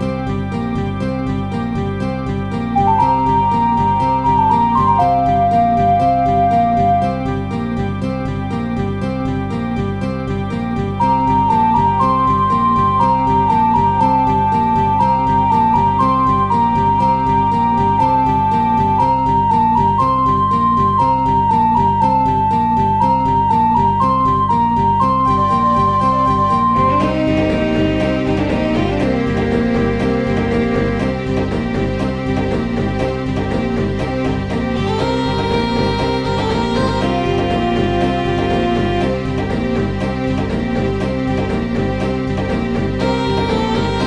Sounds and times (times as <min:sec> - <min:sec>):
Theme music: 0:00.0 - 0:44.0.